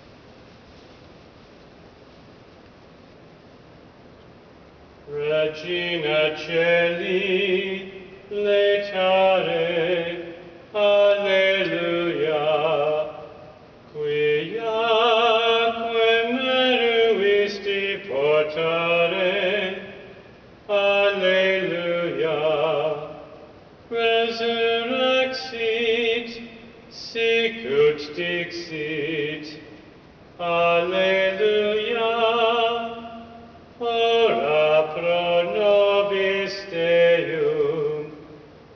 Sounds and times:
Mantra: 5.1 - 29.8, 30.4 - 38.5.

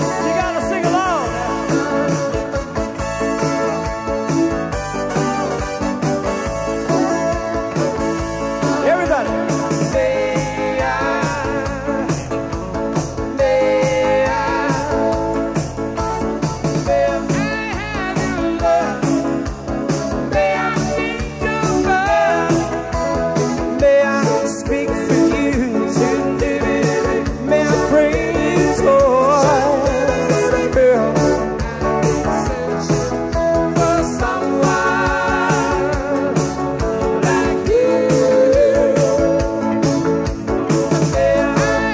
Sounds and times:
Pop music: 0.0 - 41.9
Rhythm and blues: 0.0 - 41.9.

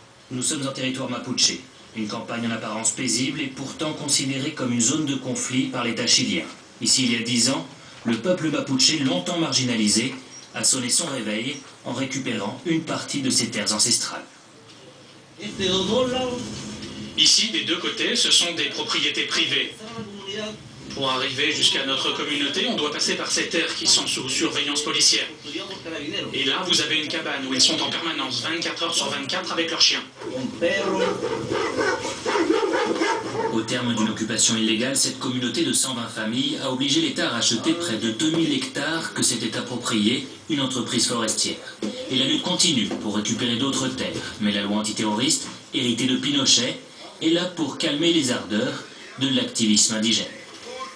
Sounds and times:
Speech: 0.3 - 16.6, 17.2 - 31.4, 33.4 - 50.9.

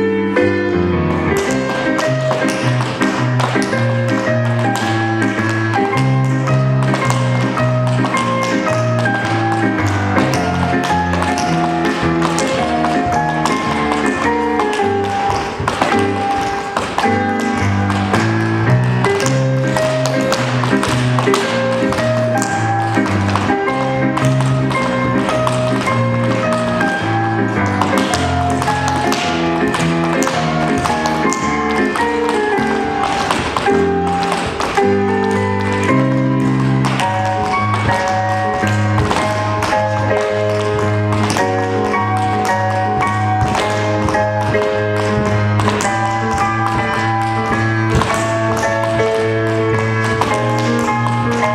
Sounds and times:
Music: 0.0 - 51.5.

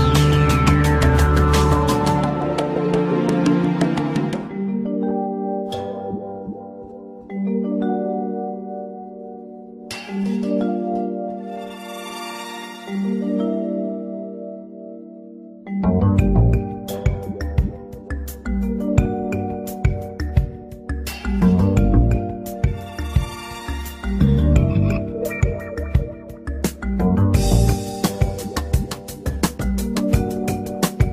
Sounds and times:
Vibraphone: 0.0 - 14.8, 15.7 - 31.1.

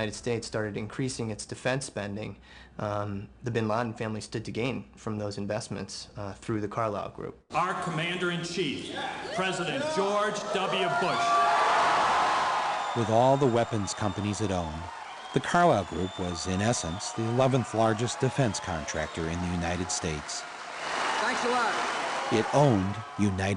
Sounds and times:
Male speech, man speaking: 0.0 - 11.4, 13.0 - 20.4, 22.3 - 23.5.

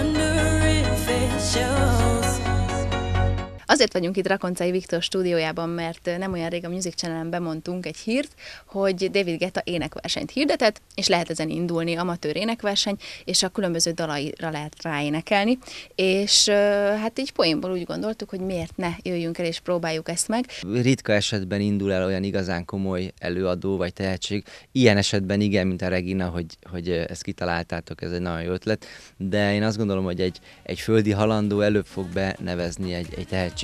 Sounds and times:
Music: 0.0 - 3.7, 29.8 - 33.6
Speech: 3.7 - 33.6.

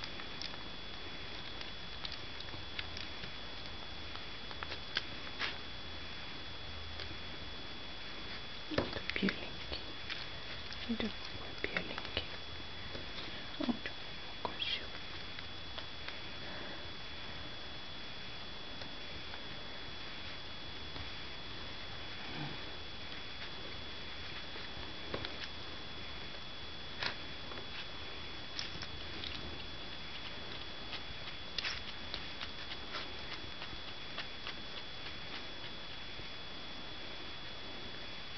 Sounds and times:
Speech: 10.8 - 12.3, 13.6 - 14.9.

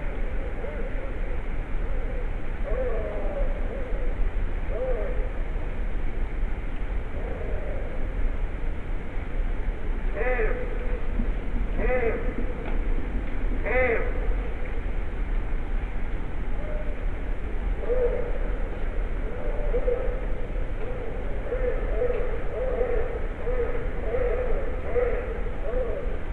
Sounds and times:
Outside, urban or manmade: 0.0 - 26.3.

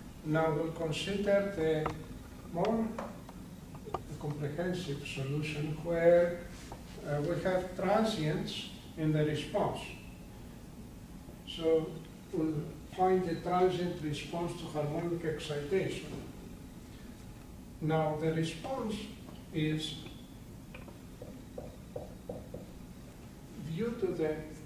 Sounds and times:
Speech: 0.2 - 3.1, 4.0 - 10.1, 11.5 - 16.3, 17.8 - 20.1, 23.6 - 24.6.

